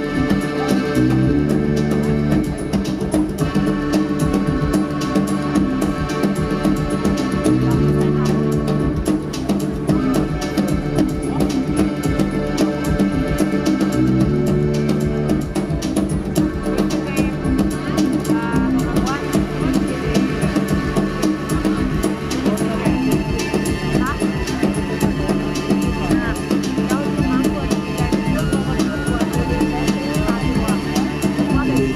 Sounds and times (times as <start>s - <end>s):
Speech: 0.0s - 1.5s, 7.2s - 12.2s, 16.2s - 31.9s
Music: 0.0s - 31.9s.